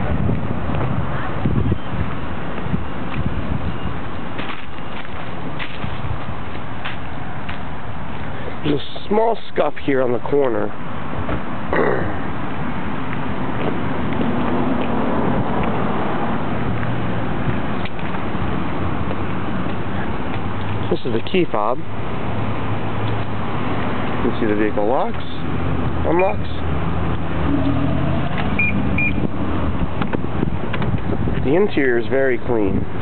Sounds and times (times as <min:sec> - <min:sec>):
Speech: 0:08.6 - 0:10.8, 0:20.8 - 0:21.9, 0:24.2 - 0:26.7, 0:31.4 - 0:32.8.